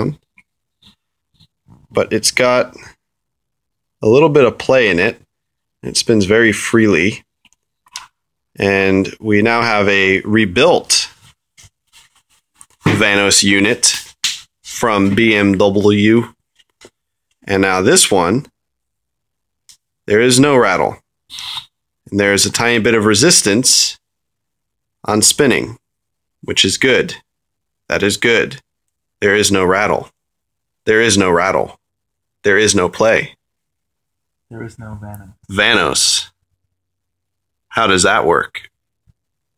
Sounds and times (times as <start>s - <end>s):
Speech: 1.9s - 3.0s, 4.0s - 7.3s, 8.6s - 11.2s, 12.9s - 14.1s, 14.7s - 16.4s, 17.4s - 18.5s, 20.1s - 21.0s, 22.1s - 24.0s, 25.0s - 25.8s, 26.4s - 27.3s, 27.9s - 30.2s, 30.8s - 31.8s, 32.4s - 33.4s, 34.5s - 36.4s, 37.7s - 38.8s.